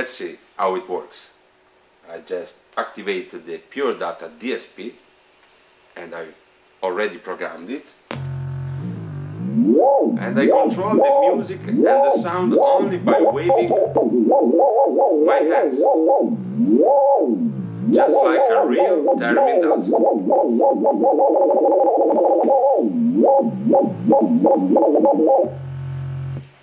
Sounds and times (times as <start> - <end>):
Theremin: 8.2 - 26.4.